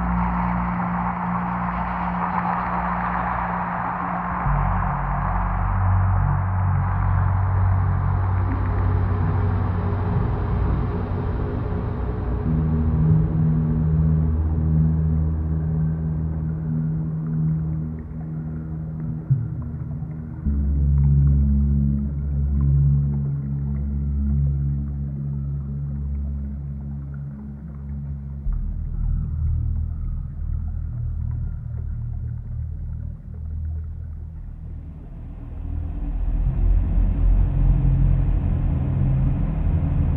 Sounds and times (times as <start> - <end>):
Ambient music: 0.0 - 40.1.